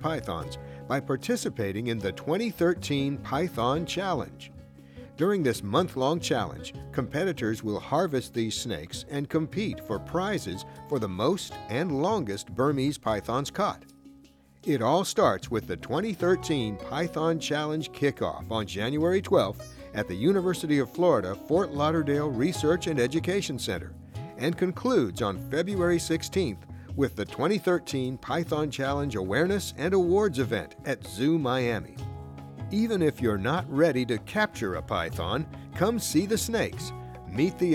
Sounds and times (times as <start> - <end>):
Speech: 0.0 - 4.5, 5.2 - 13.9, 14.6 - 32.0, 32.7 - 37.7
Music: 0.0 - 37.7.